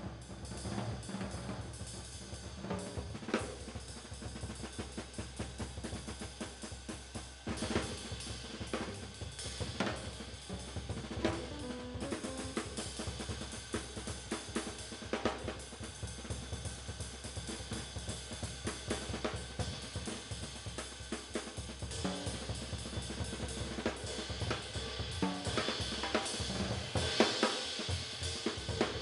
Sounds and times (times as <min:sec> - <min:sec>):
Music: 0:00.0 - 0:29.0.